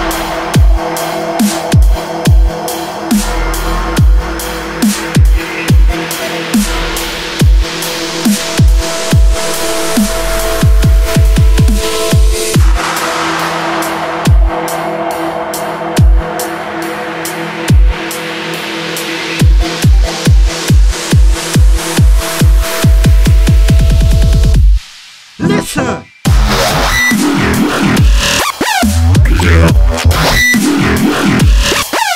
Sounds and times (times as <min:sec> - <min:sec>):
Dubstep: 0:00.0 - 0:32.1.